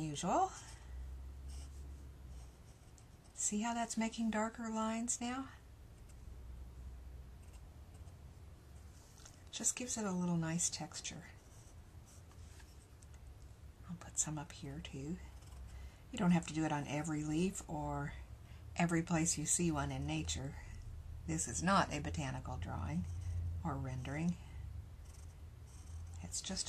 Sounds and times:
Inside, small room: 0:00.0 - 0:26.6
Writing: 0:01.5 - 0:03.4, 0:07.4 - 0:08.2, 0:11.2 - 0:12.9, 0:15.2 - 0:15.8, 0:25.0 - 0:26.6
Speech: 0:03.4 - 0:05.6, 0:18.8 - 0:20.7, 0:21.3 - 0:24.4, 0:26.2 - 0:26.6.

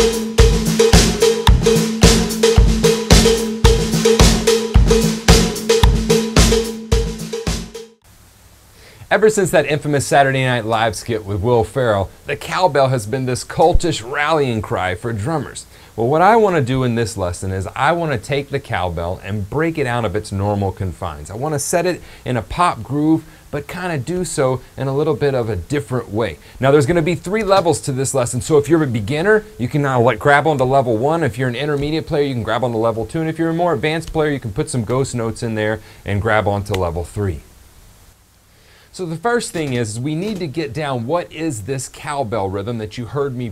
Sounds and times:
Speech: 0:09.0 - 0:37.5, 0:38.9 - 0:43.5.

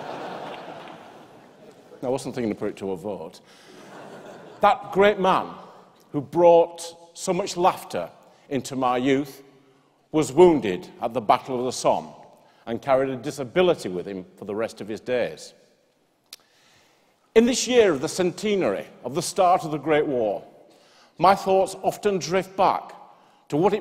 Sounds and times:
Male speech, man speaking: 0:02.0 - 0:03.4, 0:04.6 - 0:09.4, 0:10.1 - 0:15.6, 0:17.4 - 0:20.5, 0:21.2 - 0:23.8.

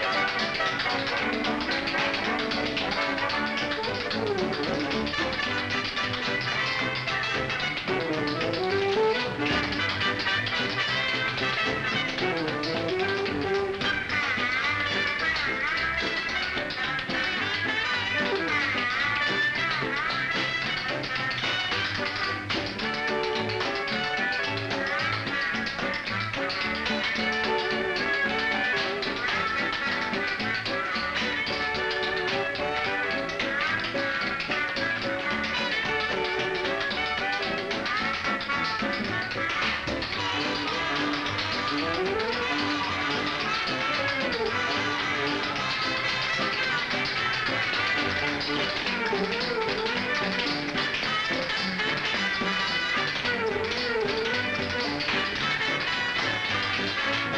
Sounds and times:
Music: 0:00.0 - 0:57.3
Tap: 0:00.0 - 0:57.3.

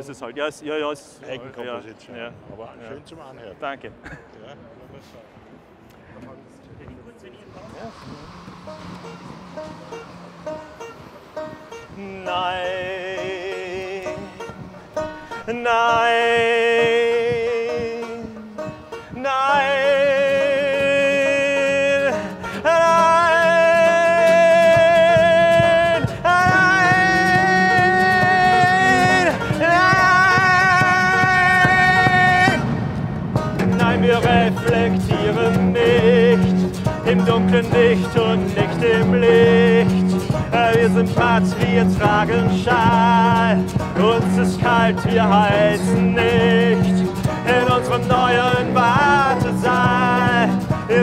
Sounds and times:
Music: 0:07.9 - 0:51.0.

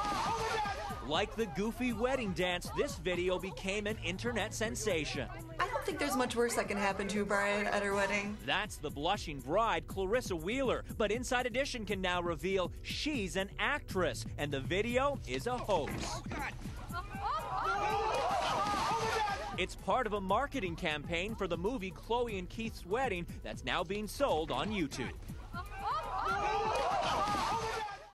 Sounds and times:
Music: 0:00.0 - 0:28.1
Speech: 0:01.1 - 0:16.5, 0:19.6 - 0:25.2.

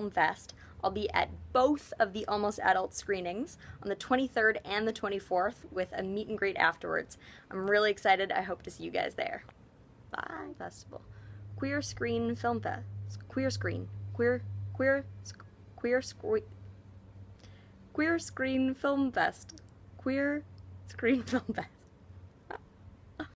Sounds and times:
Speech: 0:00.0 - 0:09.5, 0:10.1 - 0:11.0, 0:11.6 - 0:16.5, 0:18.0 - 0:21.8.

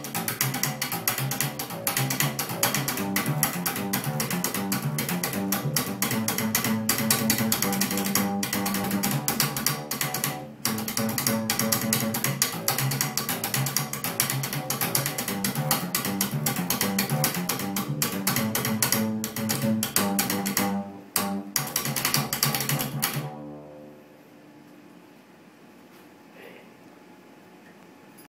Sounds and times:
Speech: 0:26.3 - 0:26.8.

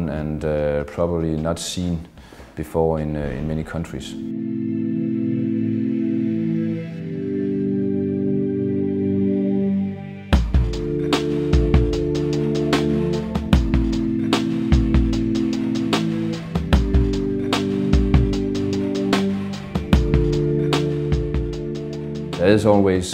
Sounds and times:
Speech: 0:00.0 - 0:04.3, 0:22.4 - 0:23.1
Music: 0:03.2 - 0:23.1.

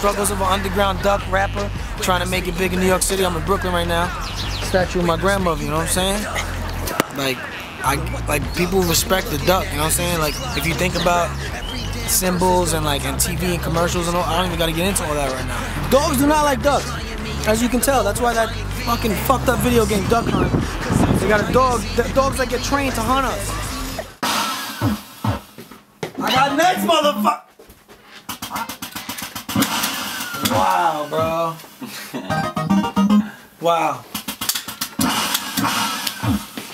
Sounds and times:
Speech: 0:00.0 - 0:06.4, 0:07.0 - 0:11.4, 0:12.1 - 0:20.5, 0:21.2 - 0:23.5, 0:26.2 - 0:27.5, 0:30.4 - 0:31.6
Music: 0:00.0 - 0:25.0, 0:32.3 - 0:33.3.

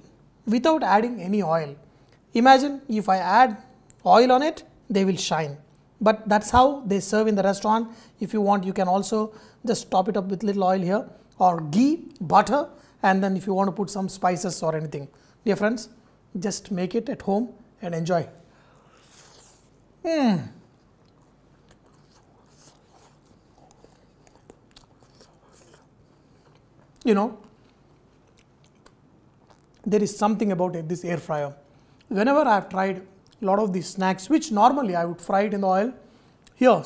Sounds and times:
Inside, small room: 0:00.0 - 0:36.8
Speech: 0:00.5 - 0:18.4, 0:20.0 - 0:20.6, 0:27.0 - 0:27.5, 0:29.8 - 0:36.0, 0:36.6 - 0:36.8
Chewing, mastication: 0:20.7 - 0:29.9.

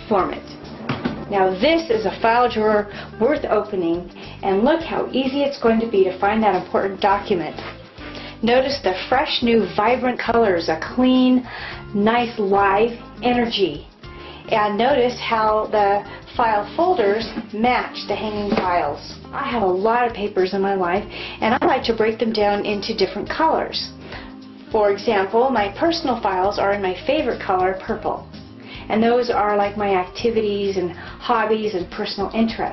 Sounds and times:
Speech: 0:00.0 - 0:00.4, 0:01.3 - 0:07.6, 0:08.4 - 0:13.9, 0:14.5 - 0:23.9, 0:24.7 - 0:28.2, 0:28.9 - 0:32.7
Music: 0:00.0 - 0:32.7.

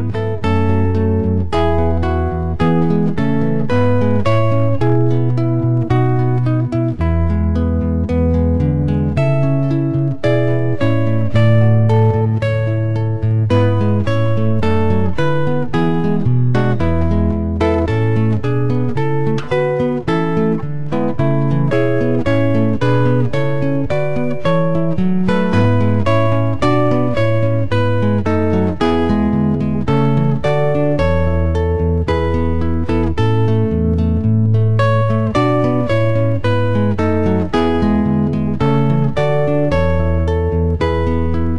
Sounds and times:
Electric guitar: 0:00.0 - 0:41.5.

